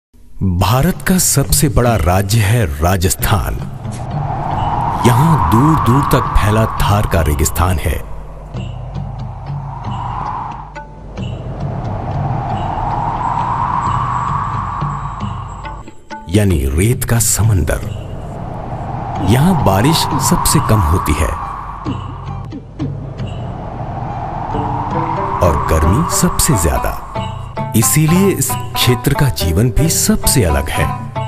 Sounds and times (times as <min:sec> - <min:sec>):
Speech: 0:00.4 - 0:03.7, 0:05.0 - 0:08.1, 0:16.3 - 0:18.0, 0:19.2 - 0:21.4, 0:25.4 - 0:27.0, 0:27.7 - 0:31.0
Music: 0:07.3 - 0:18.4, 0:21.8 - 0:31.2.